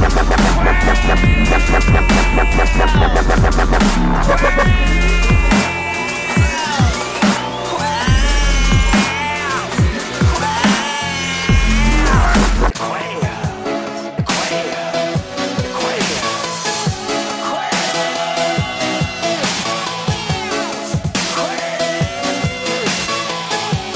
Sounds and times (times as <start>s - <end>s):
Dubstep: 0.0s - 13.2s.